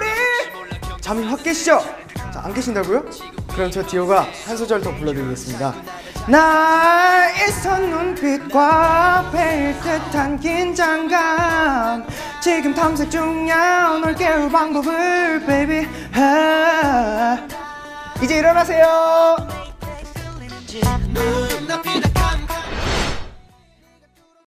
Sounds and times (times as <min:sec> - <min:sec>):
Music: 0:00.0 - 0:24.5.